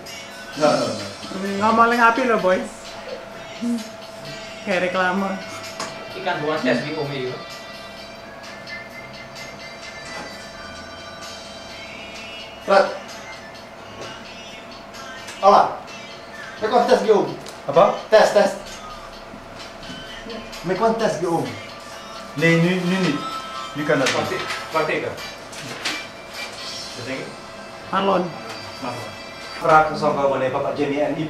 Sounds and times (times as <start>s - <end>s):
Music: 0.0s - 31.3s.